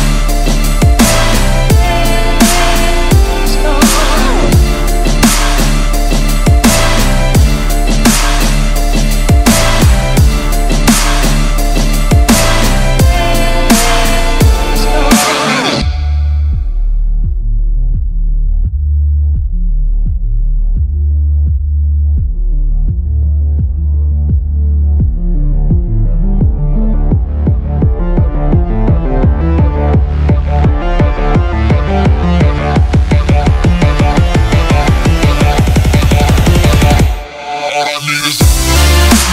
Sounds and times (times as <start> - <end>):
Dubstep: 0.0 - 17.1, 22.3 - 39.3.